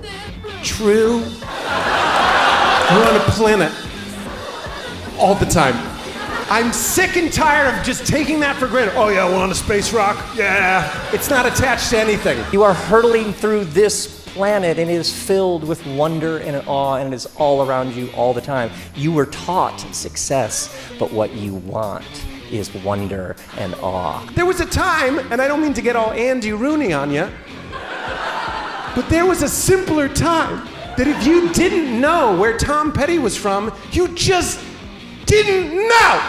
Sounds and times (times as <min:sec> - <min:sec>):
Speech: 0:00.0 - 0:01.4, 0:02.9 - 0:03.8, 0:05.2 - 0:05.9, 0:06.5 - 0:27.4, 0:29.0 - 0:34.7, 0:35.3 - 0:36.2
Music: 0:00.0 - 0:36.2.